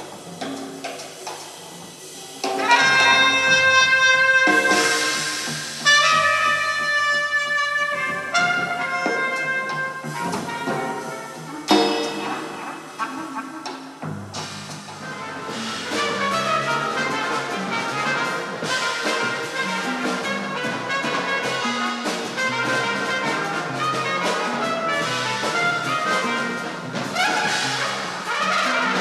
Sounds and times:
Music: 0:00.0 - 0:29.0.

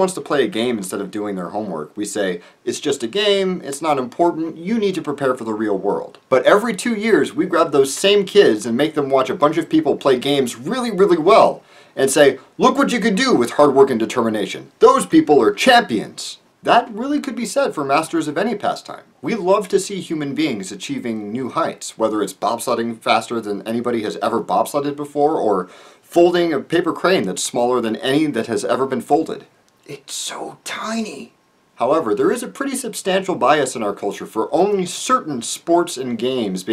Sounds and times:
Speech: 0:00.0 - 0:36.7.

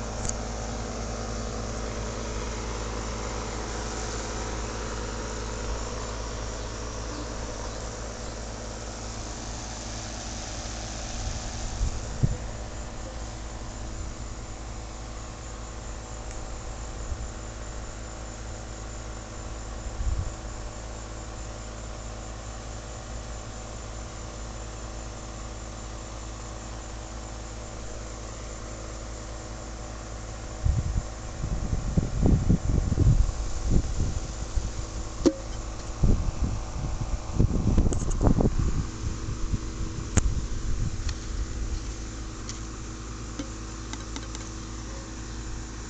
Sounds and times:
Outside, rural or natural: 0:00.0 - 0:45.9.

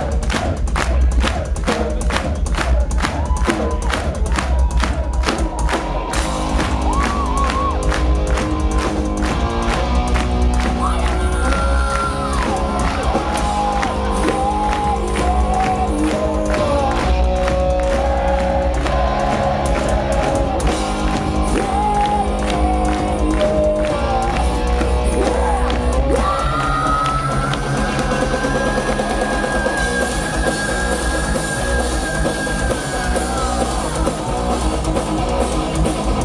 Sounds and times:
Music: 0:00.0 - 0:36.2.

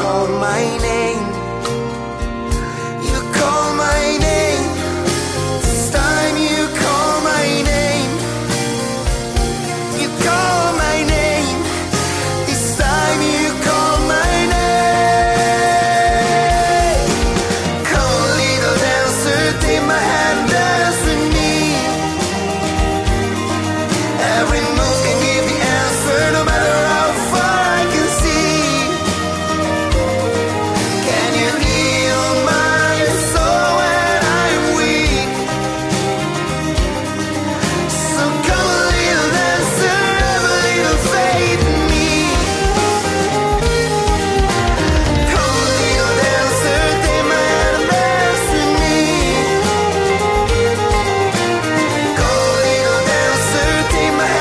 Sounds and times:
Music: 0:00.0 - 0:54.4
Singing: 0:00.0 - 0:54.4.

